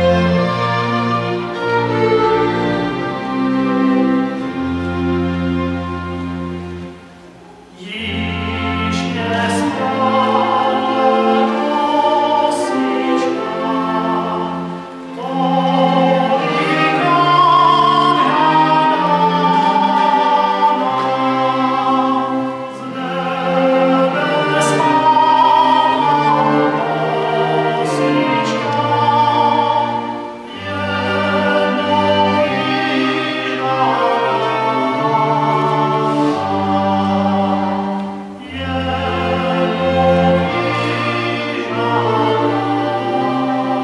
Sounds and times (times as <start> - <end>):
Cello: 0.0 - 43.8
Classical music: 0.0 - 43.8
Orchestra: 0.0 - 43.8
Violin, fiddle: 0.0 - 43.8.